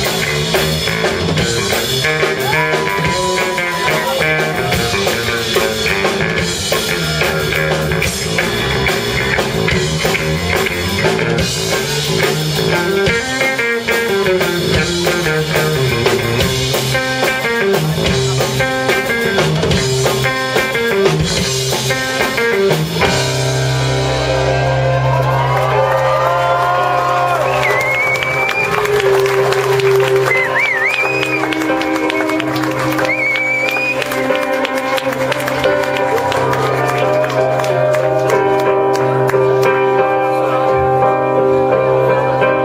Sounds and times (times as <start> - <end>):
Guitar: 0.0 - 42.6.